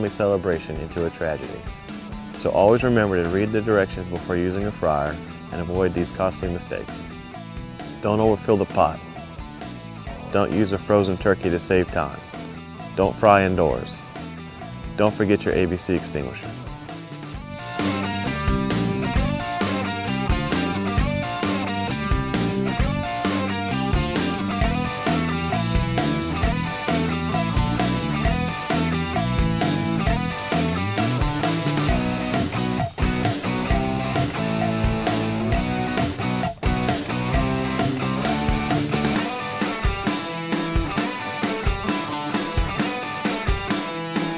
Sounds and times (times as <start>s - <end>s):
Speech: 0.0s - 1.6s, 2.4s - 7.0s, 8.0s - 9.0s, 10.3s - 12.2s, 13.0s - 14.0s, 15.0s - 16.6s
Music: 0.0s - 44.3s.